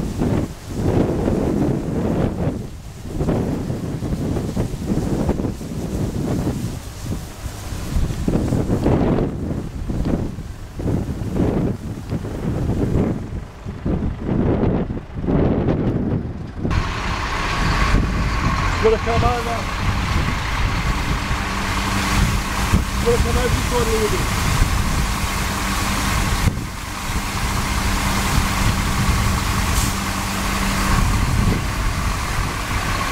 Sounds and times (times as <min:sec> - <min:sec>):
Truck: 0:00.0 - 0:33.1
Speech: 0:18.8 - 0:19.7, 0:23.0 - 0:24.3.